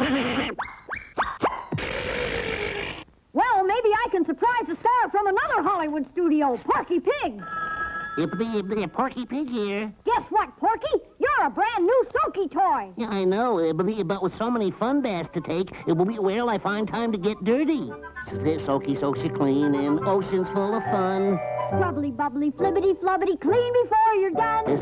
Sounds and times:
Speech: 8.2 - 24.8
Music: 14.4 - 24.8.

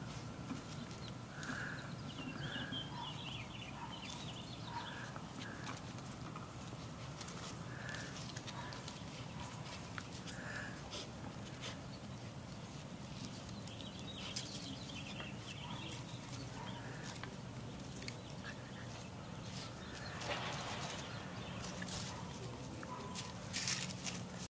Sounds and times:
Animal: 0.9 - 11.8, 13.2 - 24.3.

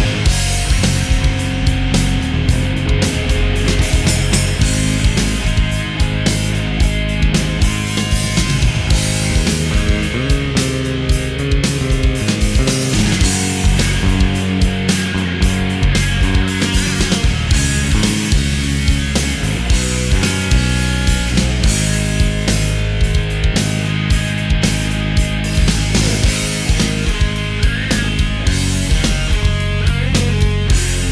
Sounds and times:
Music: 0.0 - 31.1.

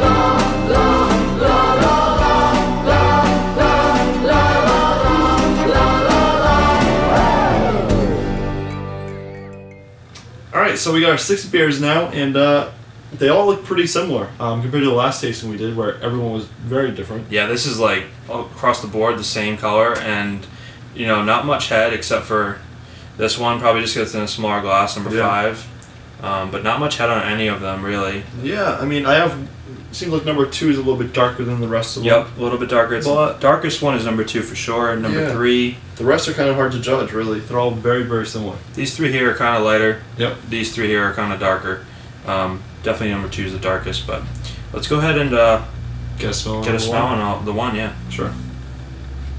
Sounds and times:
Gospel music: 0.0 - 10.3, 35.0 - 35.7, 44.4 - 49.3.

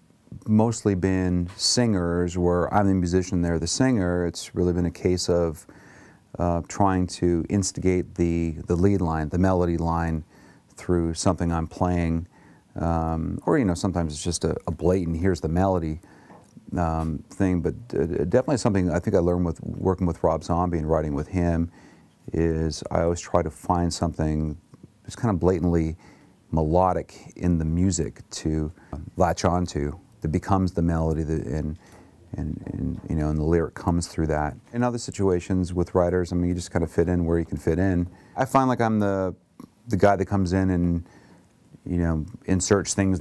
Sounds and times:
Speech: 0.3 - 5.7, 6.3 - 16.0, 16.6 - 41.1, 41.7 - 43.2.

